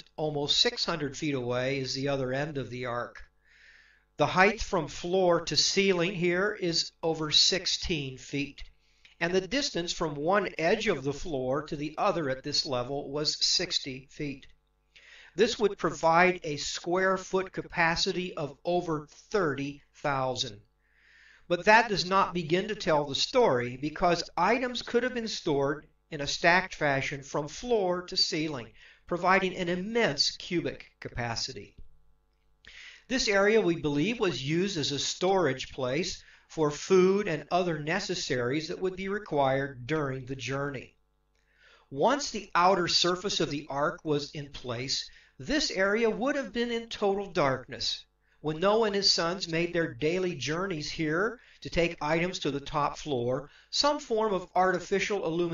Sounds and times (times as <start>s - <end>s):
Speech: 0.0s - 3.3s, 4.2s - 14.6s, 15.4s - 20.6s, 21.5s - 31.8s, 33.1s - 41.0s, 41.9s - 55.5s.